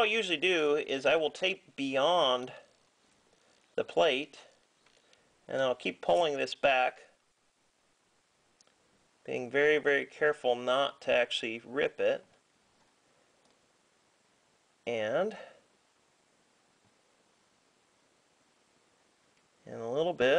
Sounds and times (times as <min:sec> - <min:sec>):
Speech: 0:00.0 - 0:02.7, 0:03.8 - 0:04.5, 0:05.5 - 0:07.2, 0:09.3 - 0:12.4, 0:14.8 - 0:15.6, 0:19.6 - 0:20.3.